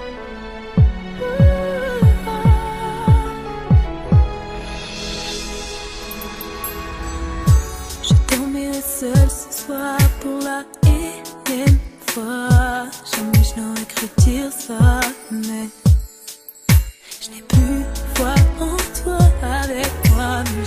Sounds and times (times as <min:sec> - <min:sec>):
Music: 0:00.0 - 0:20.6.